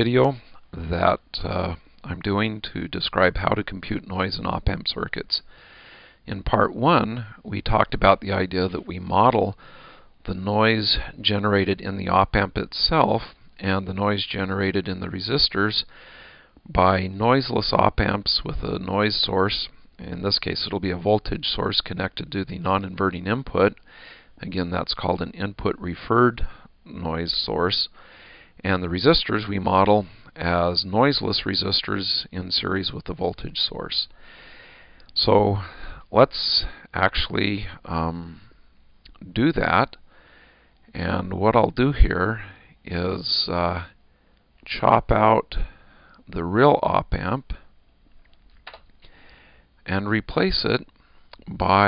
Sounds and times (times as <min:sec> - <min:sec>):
Speech: 0:00.0 - 0:05.5, 0:06.3 - 0:09.6, 0:10.2 - 0:15.9, 0:16.7 - 0:23.8, 0:24.4 - 0:28.0, 0:28.6 - 0:34.1, 0:35.2 - 0:38.4, 0:39.1 - 0:40.0, 0:40.9 - 0:44.0, 0:44.6 - 0:45.7, 0:46.3 - 0:47.7, 0:49.8 - 0:51.8.